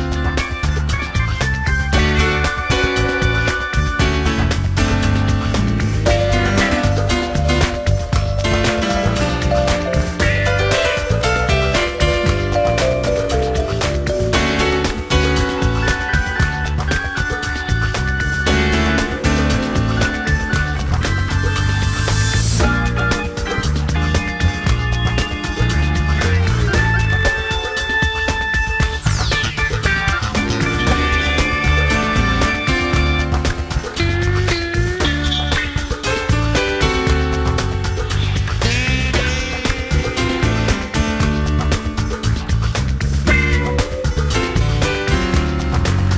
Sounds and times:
Rhythm and blues: 0.0s - 46.1s.

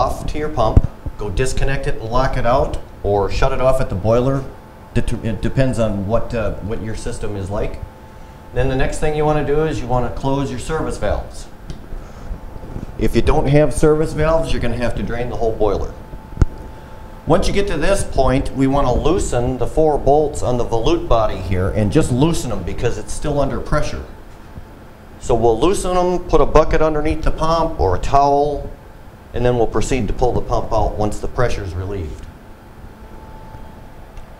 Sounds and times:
Speech: 0.0s - 7.9s, 8.6s - 11.6s, 13.0s - 16.0s, 17.3s - 24.2s, 25.2s - 32.3s.

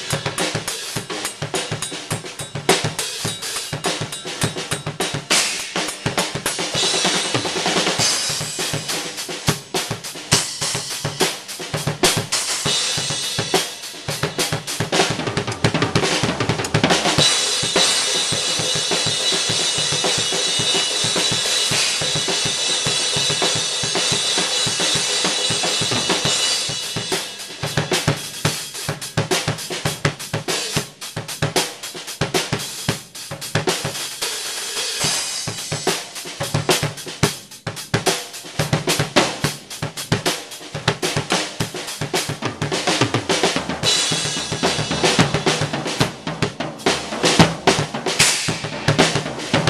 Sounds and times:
Hi-hat: 0.0s - 15.0s.

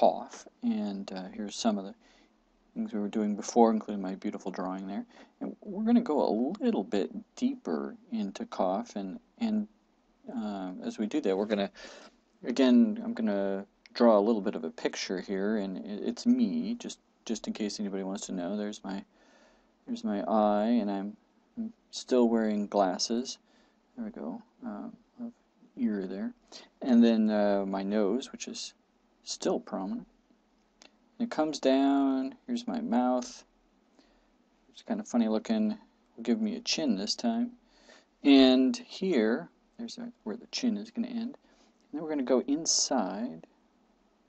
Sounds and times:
Speech: 0.0s - 2.0s, 2.8s - 9.7s, 10.3s - 11.8s, 12.4s - 19.1s, 19.9s - 23.4s, 24.0s - 30.1s, 31.2s - 33.5s, 34.7s - 37.6s, 38.2s - 43.5s.

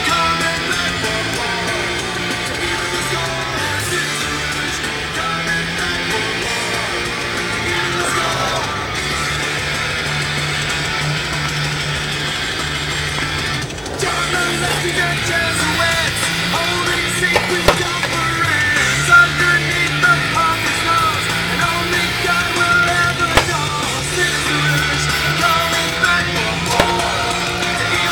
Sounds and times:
Music: 0.0s - 28.1s.

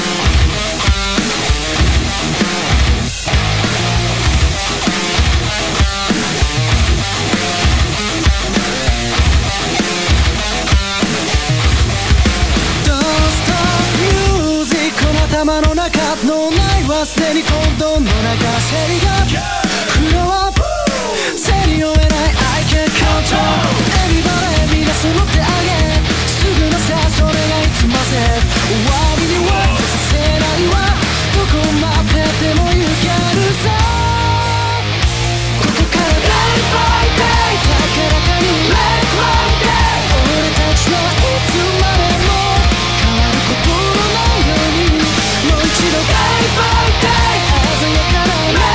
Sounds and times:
Music: 0.0s - 48.7s.

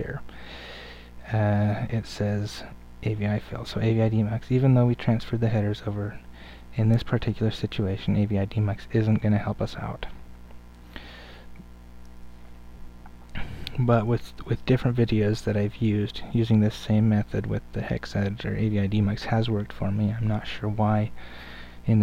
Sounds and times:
Speech: 0.0s - 0.3s, 1.2s - 6.2s, 6.8s - 10.2s, 13.4s - 21.2s.

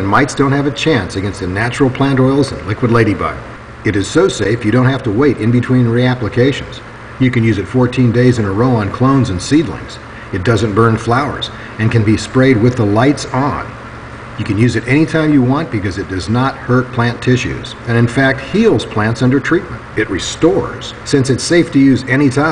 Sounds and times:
Speech: 0.0s - 13.8s, 14.4s - 22.5s.

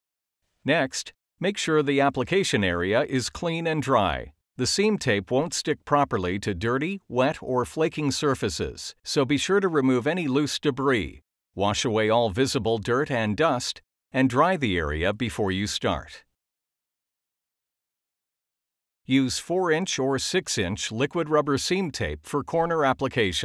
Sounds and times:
Speech: 0.6s - 16.3s, 19.1s - 23.4s.

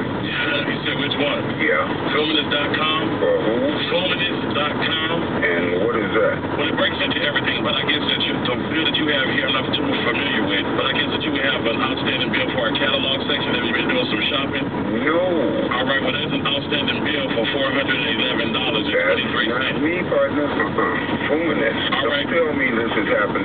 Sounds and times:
Speech: 0.2s - 23.4s.

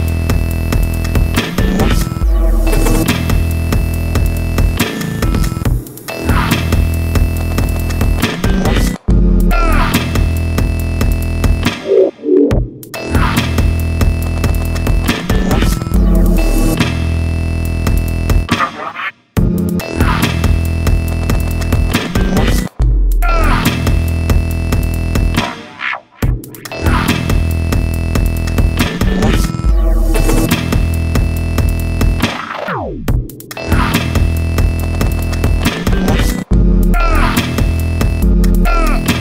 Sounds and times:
Music: 0.0s - 39.2s.

